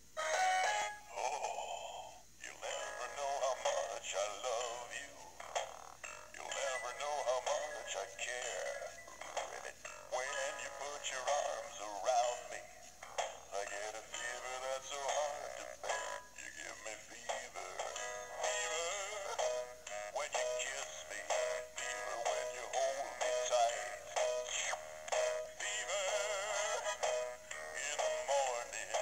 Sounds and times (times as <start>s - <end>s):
Inside, small room: 0.0s - 29.0s
Music: 0.0s - 29.0s.